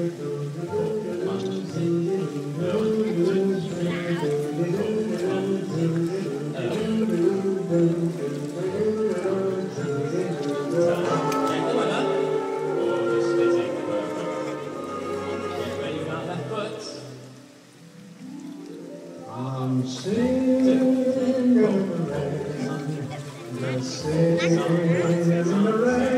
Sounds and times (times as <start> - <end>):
Male singing: 0.0 - 17.1, 19.2 - 26.1
Music: 0.0 - 26.1
Speech: 2.9 - 5.4, 10.3 - 12.2, 12.8 - 14.6, 15.5 - 17.1, 22.4 - 26.1.